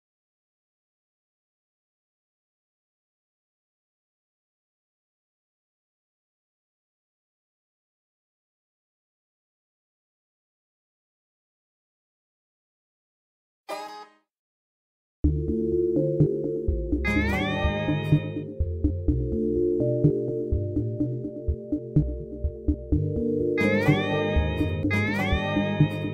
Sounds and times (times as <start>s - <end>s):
Synthesizer: 15.3s - 26.1s.